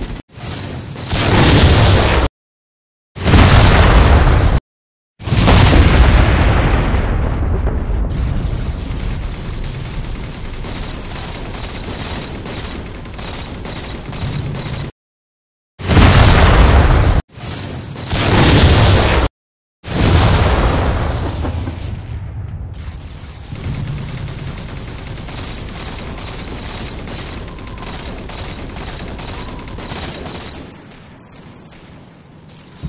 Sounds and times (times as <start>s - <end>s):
Eruption: 3.2s - 4.6s, 5.2s - 14.2s, 15.8s - 17.2s, 19.9s - 32.8s.